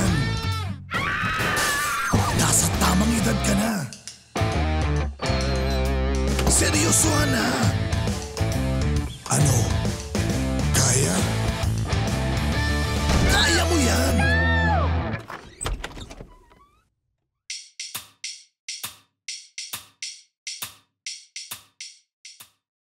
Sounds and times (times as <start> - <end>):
Music: 0.0 - 15.4.